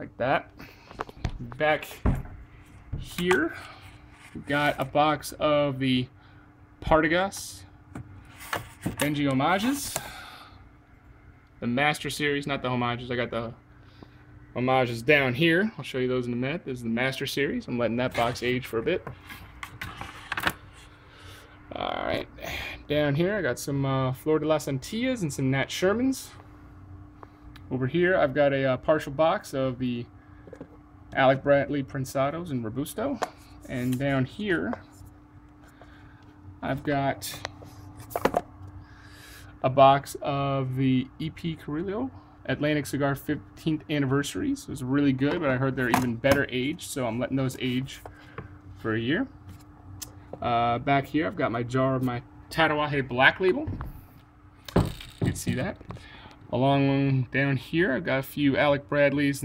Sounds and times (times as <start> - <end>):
Speech: 0.0 - 0.5, 1.4 - 2.1, 3.0 - 3.7, 4.4 - 6.1, 6.8 - 7.7, 9.0 - 10.0, 11.6 - 13.6, 14.6 - 19.1, 21.7 - 26.4, 27.7 - 30.1, 31.1 - 34.9, 36.6 - 37.5, 39.6 - 48.1, 48.8 - 49.3, 50.4 - 53.8, 55.2 - 55.8, 56.5 - 59.4.